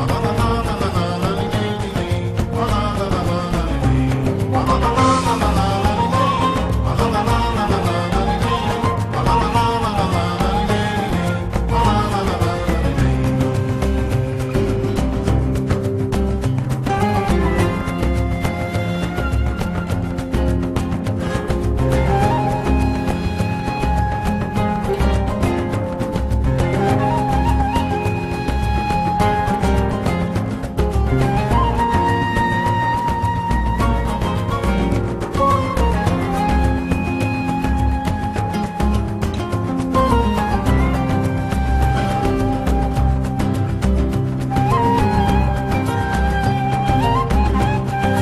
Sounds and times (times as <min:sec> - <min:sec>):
Exciting music: 0:00.0 - 0:48.2.